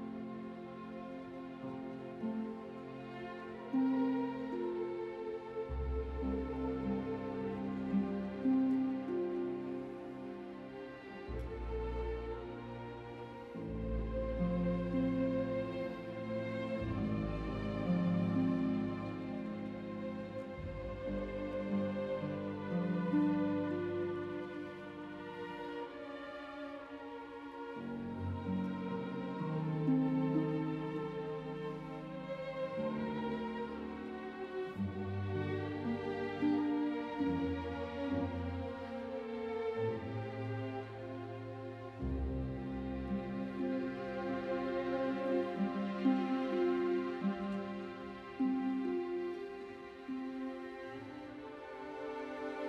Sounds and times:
Music: 0:00.0 - 0:52.6.

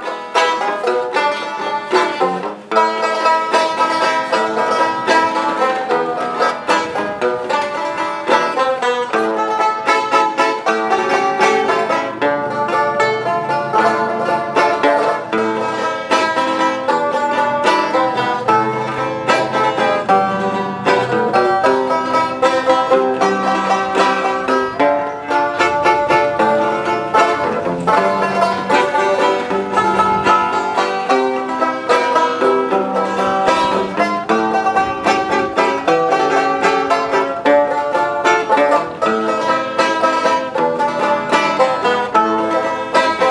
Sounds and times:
Banjo: 0:00.0 - 0:43.3
Bluegrass: 0:00.0 - 0:43.3
Bowed string instrument: 0:00.0 - 0:43.3.

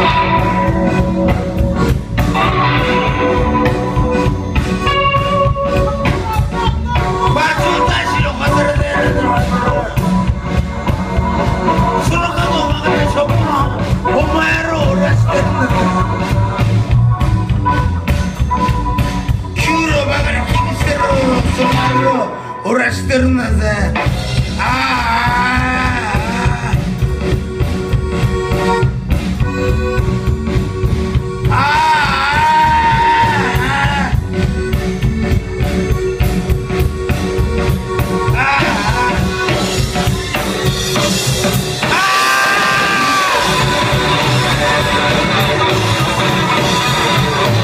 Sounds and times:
Music: 0:00.0 - 0:47.6.

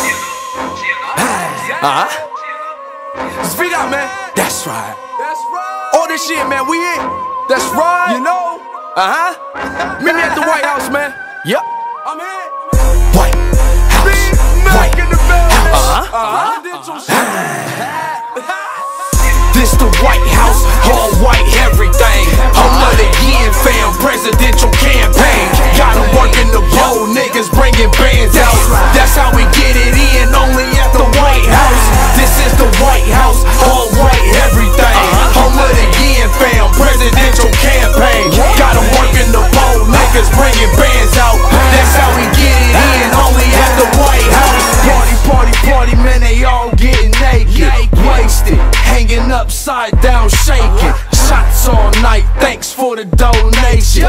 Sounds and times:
Dance music: 0:00.0 - 0:02.4, 0:12.7 - 0:17.2, 0:17.8 - 0:54.0.

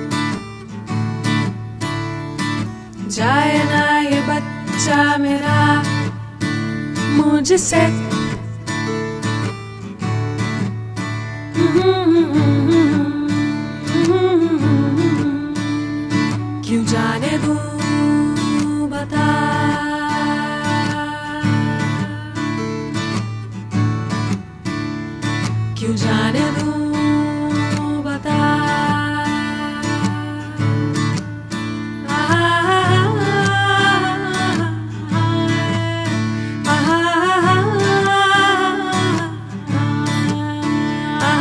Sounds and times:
Music: 0:00.0 - 0:41.4.

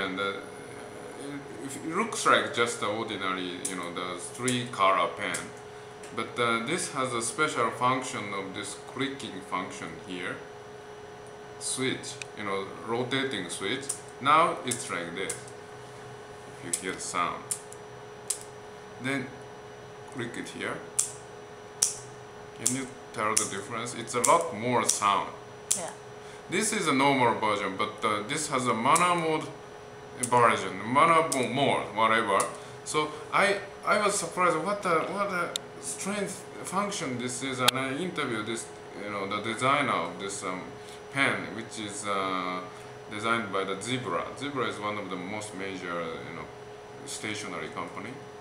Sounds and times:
Speech: 0:00.0 - 0:10.5, 0:11.6 - 0:15.5, 0:16.6 - 0:17.5, 0:19.0 - 0:19.4, 0:20.2 - 0:20.9, 0:22.6 - 0:29.6, 0:30.2 - 0:48.2.

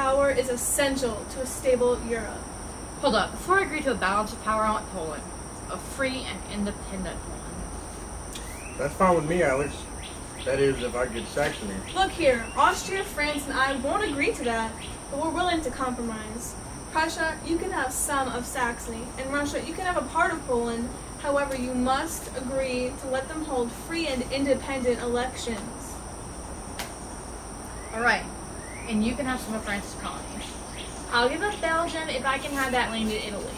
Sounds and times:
Speech: 0:08.8 - 0:09.9, 0:10.5 - 0:25.8, 0:31.1 - 0:33.5.

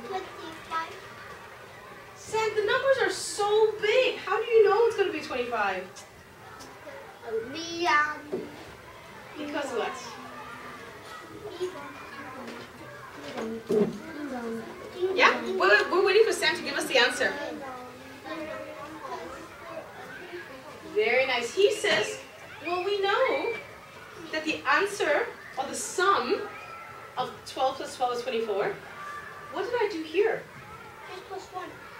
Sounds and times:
Child speech, kid speaking: 0:00.0 - 0:03.0, 0:06.4 - 0:08.6, 0:10.1 - 0:15.7, 0:17.2 - 0:21.0, 0:30.4 - 0:31.9.

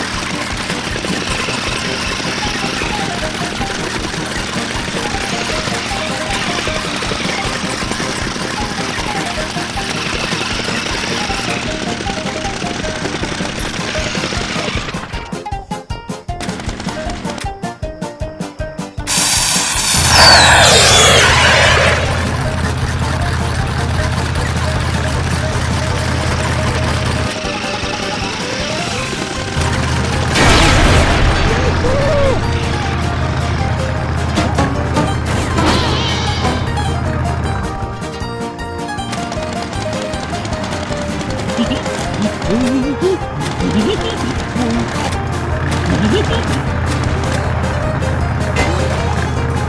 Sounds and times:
Music: 0:00.0 - 0:49.6.

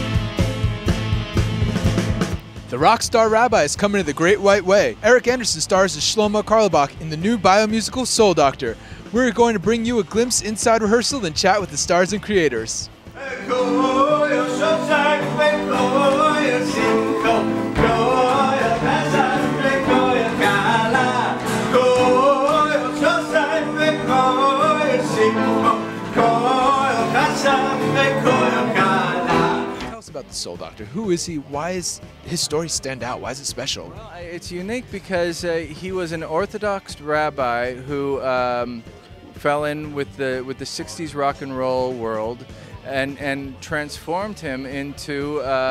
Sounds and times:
Music: 0:00.0 - 0:45.7
Speech: 0:02.7 - 0:12.9, 0:29.8 - 0:45.7.

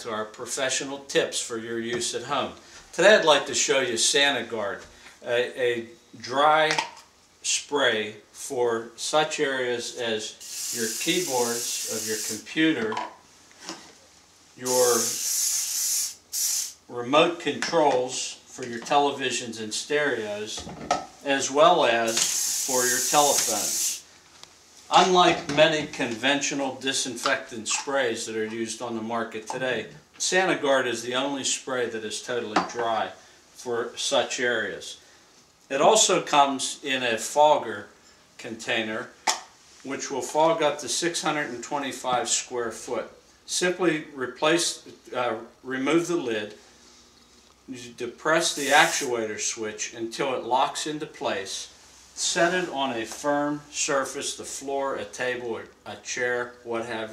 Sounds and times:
Speech: 0:00.0 - 0:06.8, 0:07.4 - 0:13.1, 0:14.6 - 0:15.2, 0:16.9 - 0:23.9, 0:24.9 - 0:35.0, 0:35.7 - 0:39.2, 0:39.8 - 0:46.6, 0:47.7 - 0:57.1.

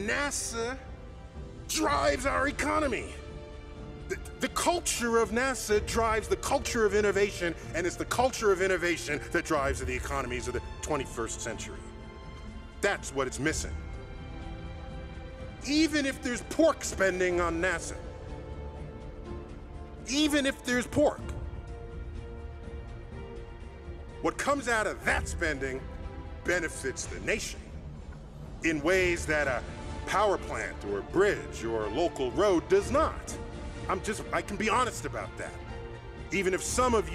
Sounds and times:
Male speech, man speaking: 0:00.0 - 0:00.9, 0:01.7 - 0:03.2, 0:04.1 - 0:11.9, 0:12.8 - 0:13.8, 0:15.6 - 0:18.1, 0:20.0 - 0:21.3, 0:24.2 - 0:25.8, 0:26.4 - 0:27.6, 0:28.6 - 0:35.6, 0:36.3 - 0:37.1
Music: 0:00.0 - 0:37.1.

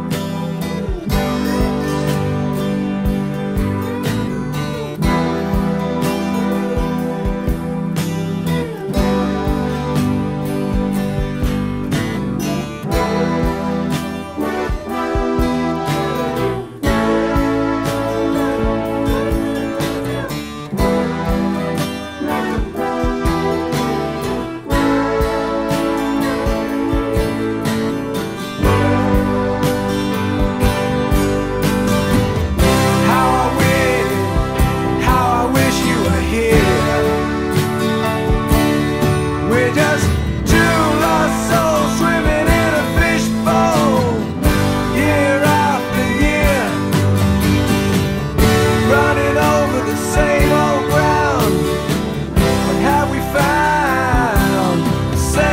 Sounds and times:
Music: 0:00.0 - 0:55.5.

